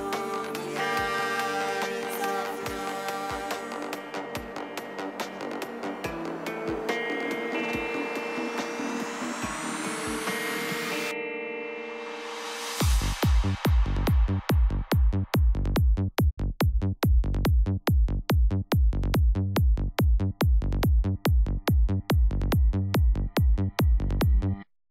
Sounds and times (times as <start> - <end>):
Trance music: 0.0 - 15.9.